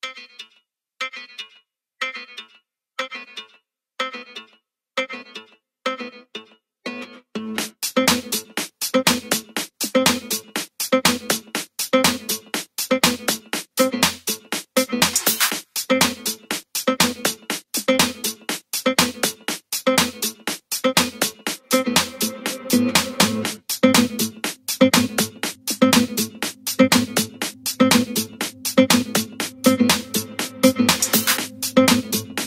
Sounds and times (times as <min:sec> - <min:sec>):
Music: 0:00.0 - 0:32.4.